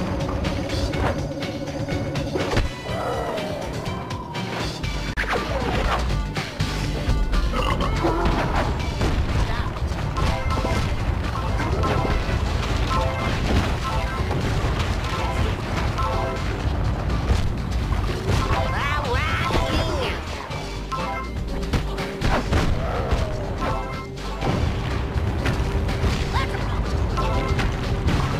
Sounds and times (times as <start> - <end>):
Smash, crash: 8.2 - 20.5, 21.7 - 28.3.